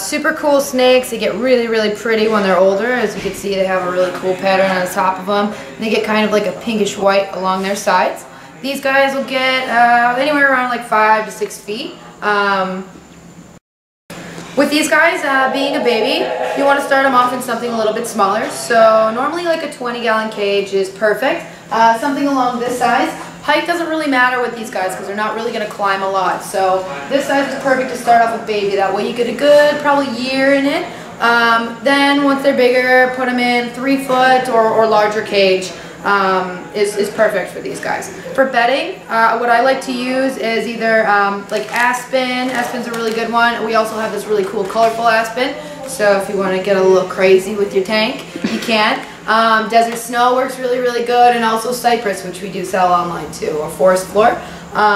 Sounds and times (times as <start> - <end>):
Speech: 0.0 - 12.9, 14.6 - 54.9.